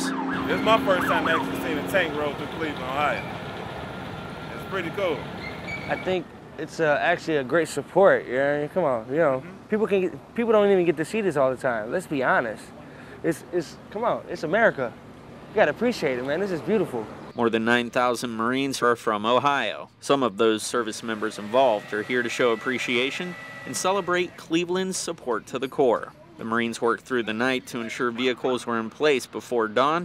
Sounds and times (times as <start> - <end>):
Vehicle: 0.0 - 30.0.